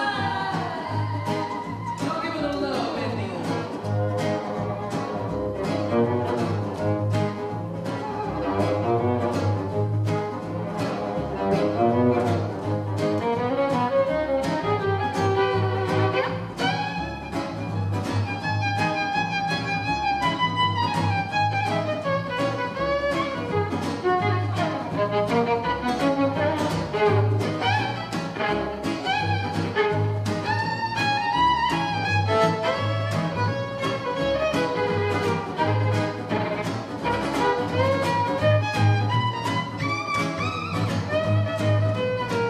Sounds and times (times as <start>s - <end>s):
String section: 0.0s - 42.4s.